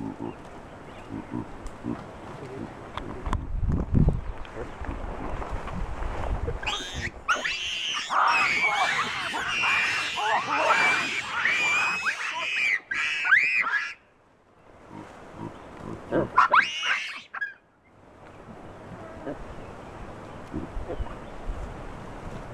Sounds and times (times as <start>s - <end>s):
Outside, rural or natural: 0.0s - 22.5s
Animal: 6.6s - 14.0s.